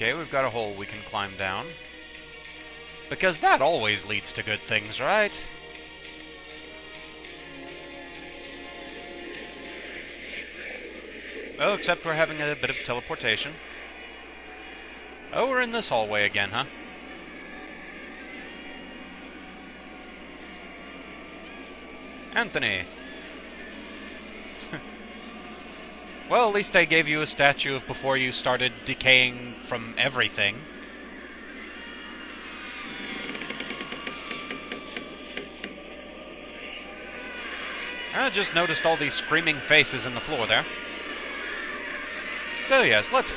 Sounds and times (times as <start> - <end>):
Speech: 0.0 - 1.8, 3.1 - 5.5, 11.6 - 13.6, 15.4 - 16.7, 22.4 - 22.9, 26.3 - 30.6, 38.2 - 40.7, 42.6 - 43.3.